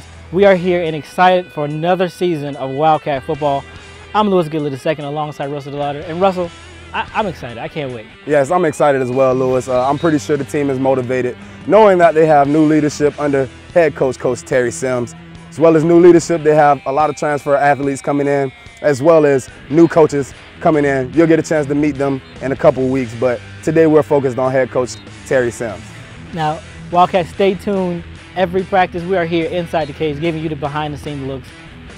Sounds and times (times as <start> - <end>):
Music: 0.0 - 31.9
Speech: 0.4 - 3.6, 4.2 - 31.5.